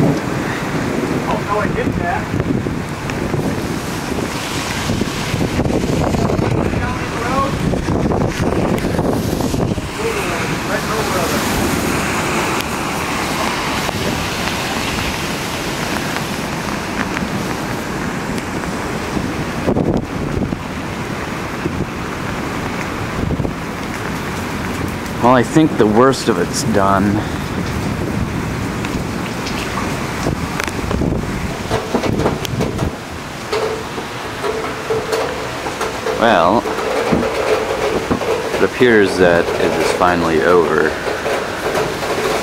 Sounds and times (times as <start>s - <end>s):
Rain: 0.0s - 42.4s
Speech: 1.3s - 2.3s, 6.6s - 7.6s, 10.0s - 11.5s, 25.2s - 27.3s, 36.2s - 36.6s, 38.6s - 41.0s.